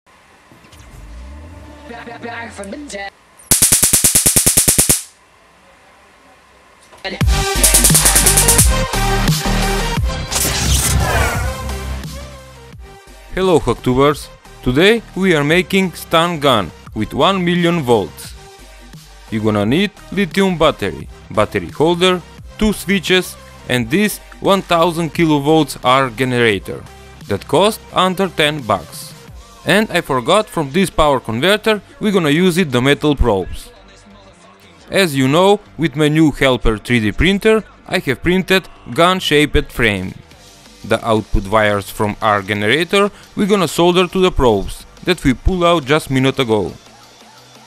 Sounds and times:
Music: 0.6s - 3.1s, 7.1s - 47.6s.

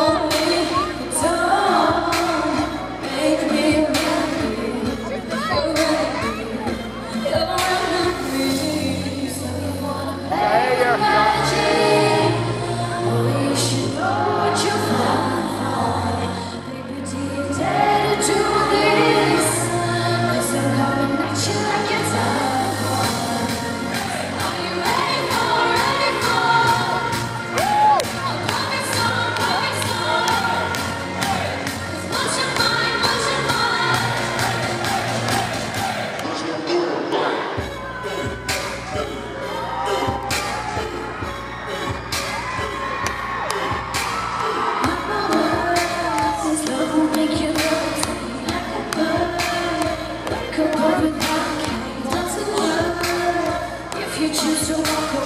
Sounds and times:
Music: 0.0s - 55.2s.

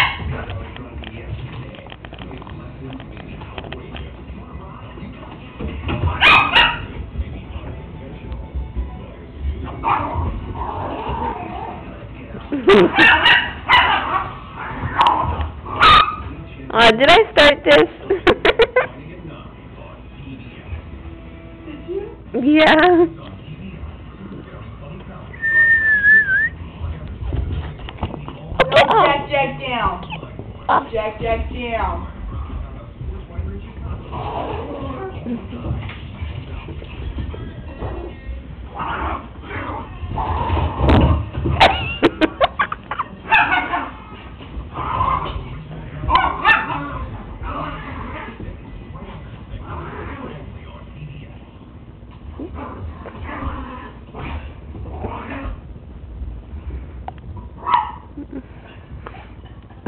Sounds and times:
Music: 0.2s - 16.9s, 18.8s - 28.6s, 29.3s - 41.6s.

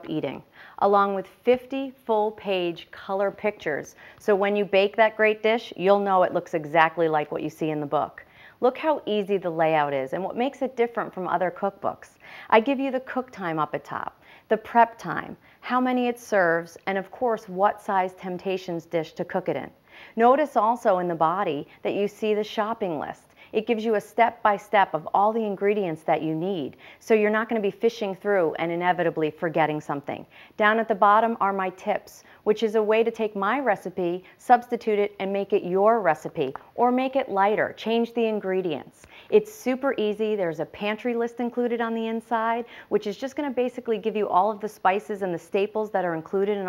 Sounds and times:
Speech: 0.0s - 46.6s.

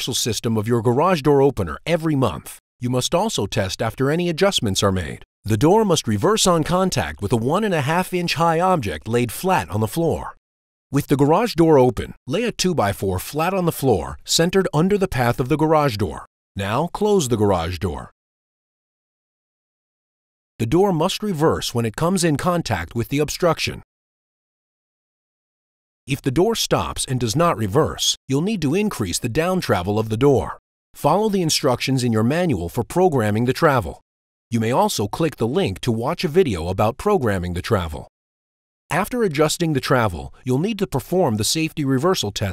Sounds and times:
Speech: 0.0s - 10.4s, 11.0s - 18.2s, 20.6s - 23.9s, 26.1s - 38.1s, 38.9s - 42.5s.

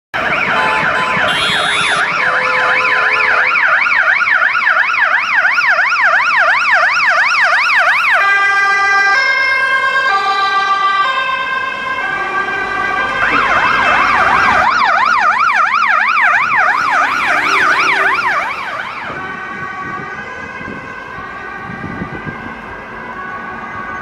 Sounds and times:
Ambulance (siren): 0.1s - 24.0s.

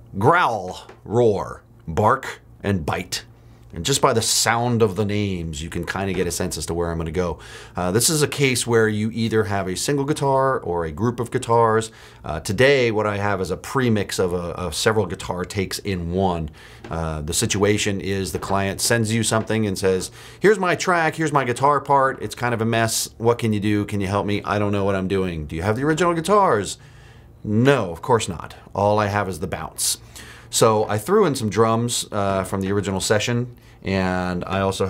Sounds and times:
Speech: 0.1s - 26.8s, 27.4s - 34.9s.

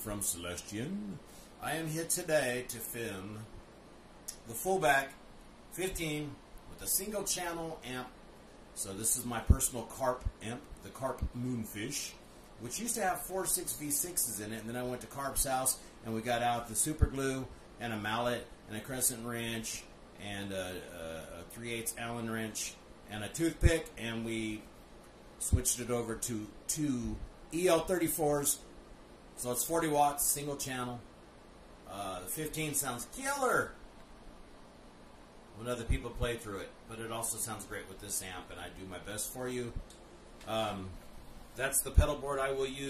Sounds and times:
Speech: 0.0s - 3.5s, 4.3s - 8.2s, 8.8s - 24.7s, 25.4s - 28.6s, 29.4s - 31.1s, 31.9s - 33.8s, 35.6s - 39.8s, 40.4s - 41.0s, 41.6s - 42.8s.

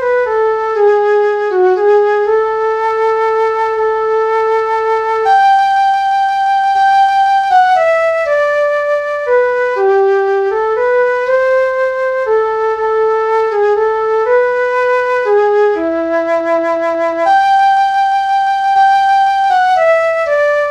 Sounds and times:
Flute: 0.0s - 20.7s.

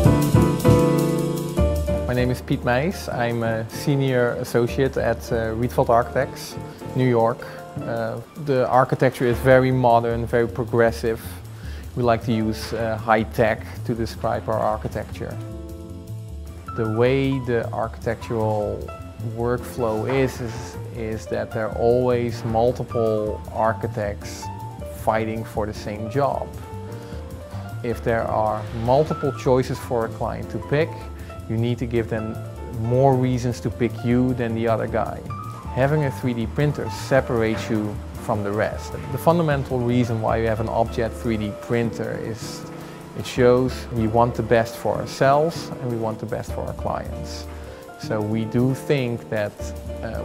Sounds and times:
Music: 0.0s - 50.2s
Speech: 2.1s - 15.4s, 16.8s - 26.6s, 27.8s - 50.2s.

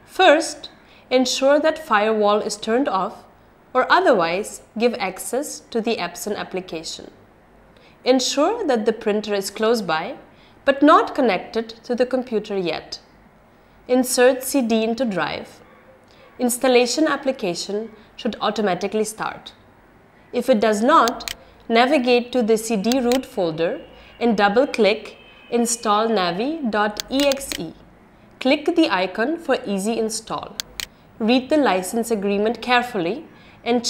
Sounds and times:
Speech: 0.1s - 7.2s, 8.0s - 13.0s, 13.9s - 15.6s, 16.4s - 19.6s, 20.4s - 27.8s, 28.4s - 30.6s, 31.2s - 33.8s.

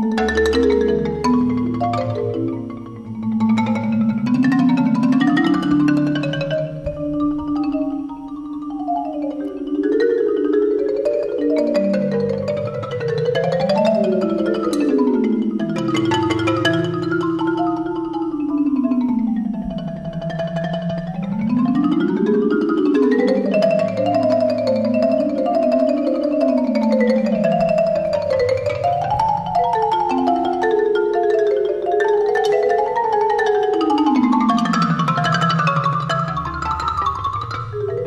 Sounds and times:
Music: 0.0s - 38.0s.

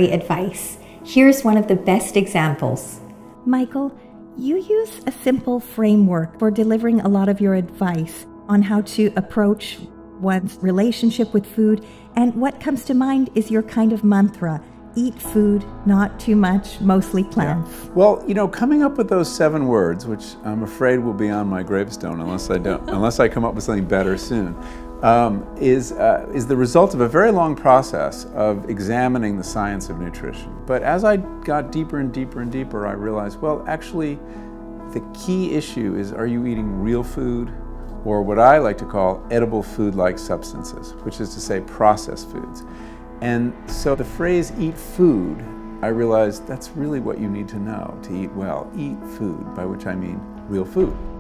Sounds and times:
Music: 0.0s - 51.2s.

